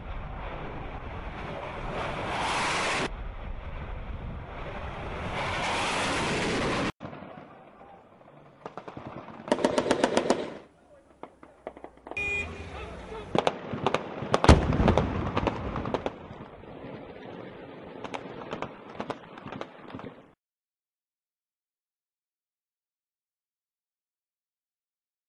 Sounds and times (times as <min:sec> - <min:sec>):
Explosion: 0:00.0 - 0:12.4, 0:13.1 - 0:19.2
Outside, urban or manmade: 0:00.0 - 0:20.4
Vehicle: 0:11.8 - 0:13.4.